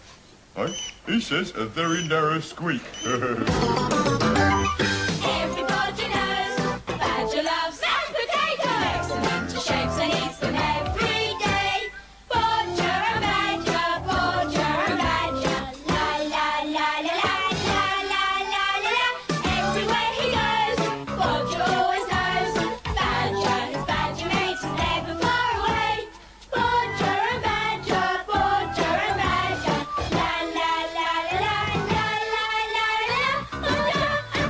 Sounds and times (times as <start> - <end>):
Jingle (music): 3.5 - 7.4, 8.7 - 16.4, 17.4 - 30.7.